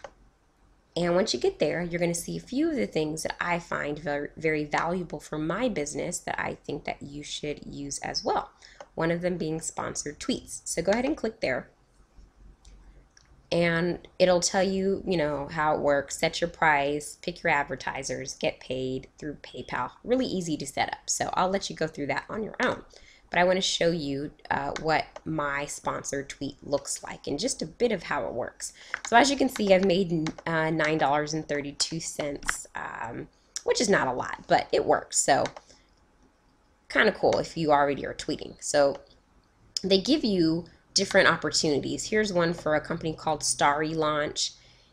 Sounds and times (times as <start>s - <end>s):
Speech: 1.0s - 11.6s, 13.6s - 35.6s, 36.9s - 39.0s, 39.8s - 44.5s.